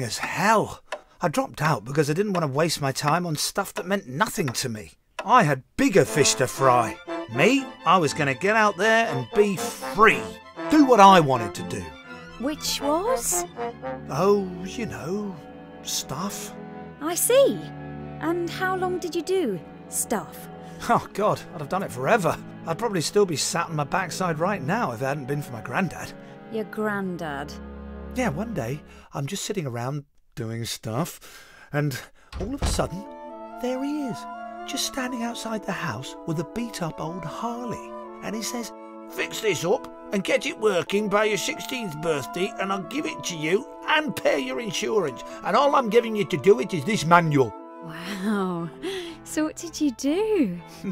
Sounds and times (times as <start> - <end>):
Speech: 0.0 - 13.5, 14.1 - 17.7, 20.8 - 27.6, 28.2 - 31.2, 31.8 - 33.0, 33.6 - 48.7
Music: 5.2 - 29.5, 32.4 - 50.9.